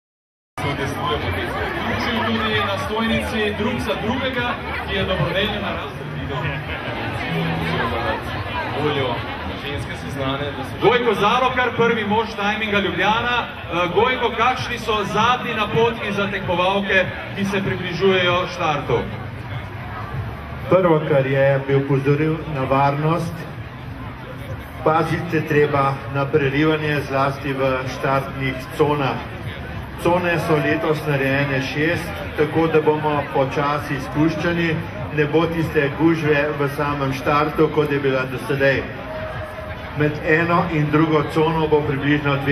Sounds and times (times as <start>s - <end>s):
Speech: 0.6s - 19.2s, 24.4s - 39.0s, 40.0s - 42.5s
Crowd: 0.6s - 42.5s.